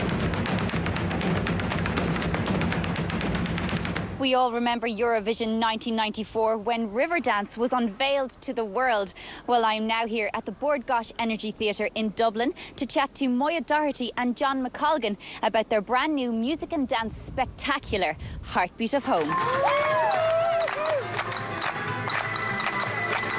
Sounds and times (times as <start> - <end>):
Speech: 4.2 - 19.3.